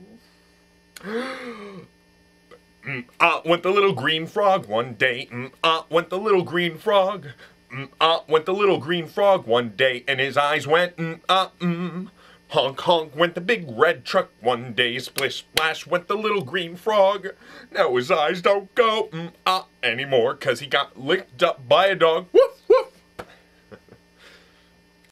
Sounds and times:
Speech: 2.8s - 22.9s.

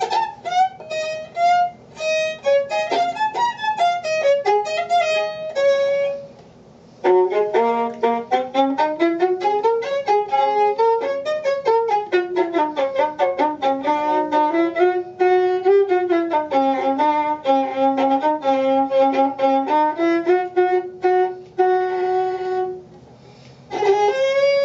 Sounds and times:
Violin, fiddle: 0.0s - 6.4s, 7.0s - 22.9s, 23.7s - 24.6s.

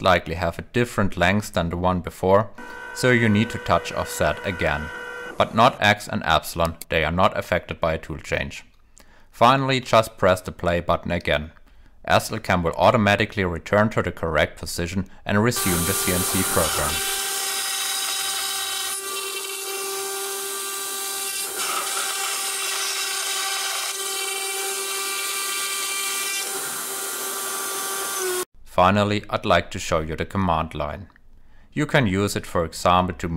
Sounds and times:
Speech: 0.0s - 8.7s, 9.4s - 17.1s, 28.7s - 31.2s, 31.8s - 33.3s.

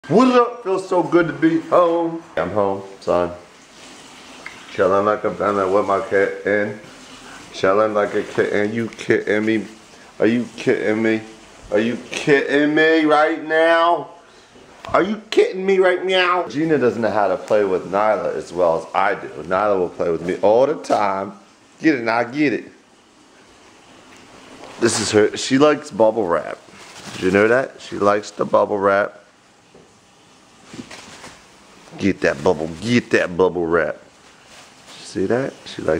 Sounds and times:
Speech: 0.0s - 3.5s, 4.7s - 6.9s, 7.5s - 14.2s, 14.8s - 22.8s, 24.8s - 29.3s, 31.9s - 34.1s, 34.9s - 35.9s.

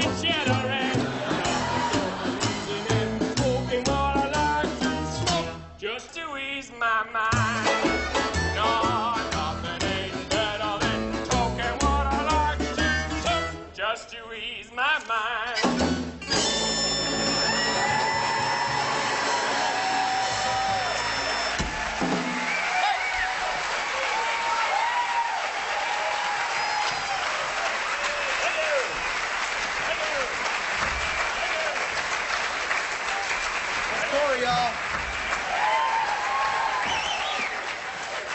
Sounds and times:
Applause: 17.6s - 38.3s.

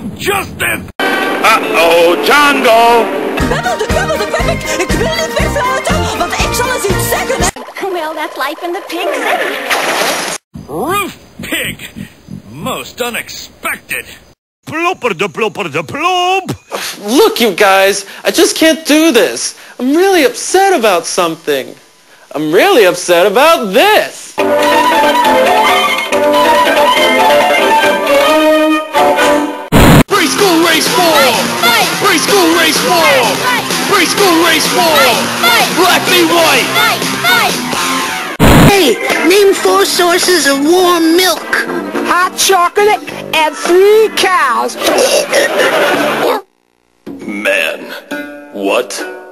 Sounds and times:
Music: 1.0s - 7.6s, 24.4s - 38.4s, 40.9s - 44.3s, 47.1s - 49.3s.

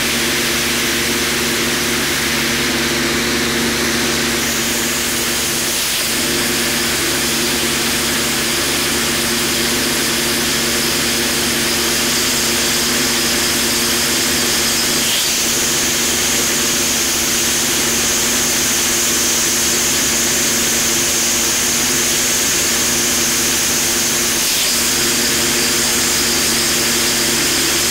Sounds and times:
Spray: 3.9s - 27.9s.

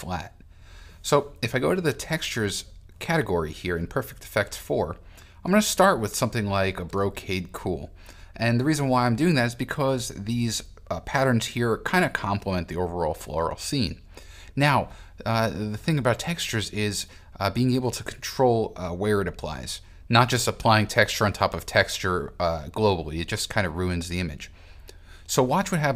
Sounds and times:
Speech: 0.0s - 0.4s, 1.0s - 14.0s, 14.6s - 24.6s, 25.3s - 25.9s.

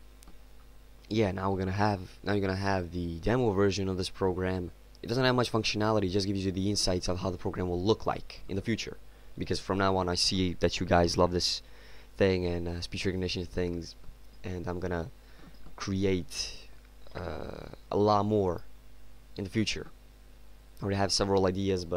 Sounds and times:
Male speech, man speaking: 1.1s - 11.6s, 12.2s - 15.1s, 15.8s - 18.7s, 19.4s - 20.0s, 20.8s - 21.9s.

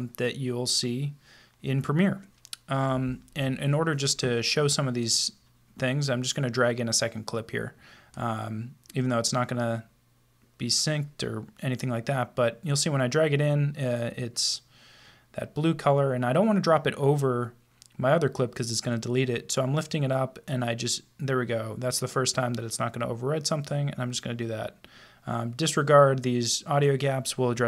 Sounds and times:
Speech: 0.0s - 9.9s, 10.6s - 14.7s, 15.4s - 27.6s.

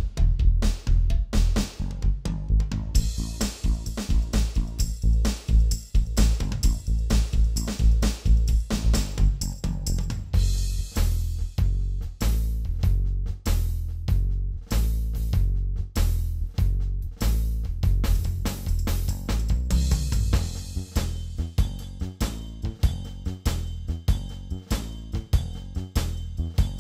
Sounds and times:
Drum kit: 0.0s - 26.8s.

